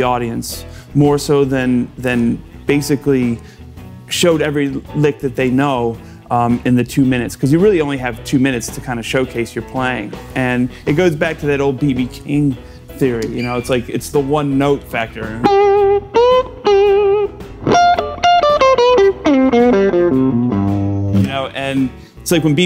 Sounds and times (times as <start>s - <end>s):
Speech: 0.0s - 3.4s, 4.1s - 15.5s, 21.2s - 22.6s
Strum: 15.0s - 22.1s
Electric guitar: 15.4s - 21.6s.